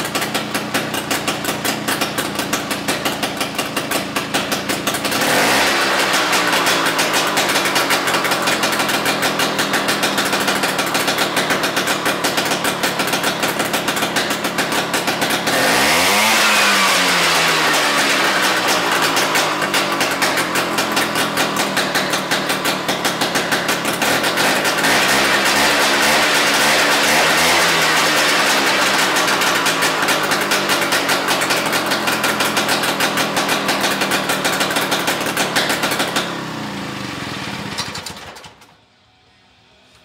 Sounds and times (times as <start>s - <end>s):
Engine: 0.0s - 40.0s.